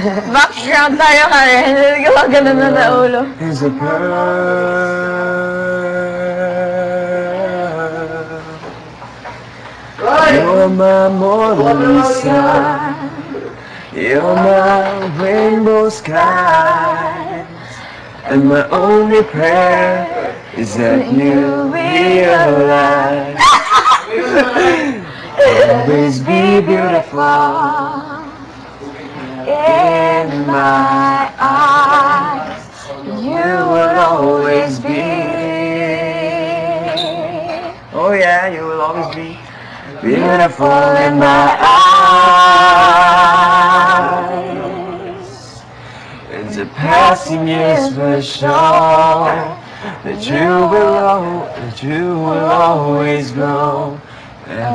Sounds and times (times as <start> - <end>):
Male singing: 1.5 - 8.9, 10.0 - 17.6, 18.2 - 23.4, 25.4 - 28.2, 29.4 - 39.4, 40.0 - 45.7, 46.3 - 54.7
Choir: 10.0 - 13.4, 14.0 - 17.6, 18.2 - 24.4, 25.4 - 28.4, 29.2 - 37.8, 40.0 - 45.6, 46.3 - 54.7
Female singing: 10.1 - 13.2, 29.4 - 37.8, 46.6 - 48.3, 49.2 - 53.4.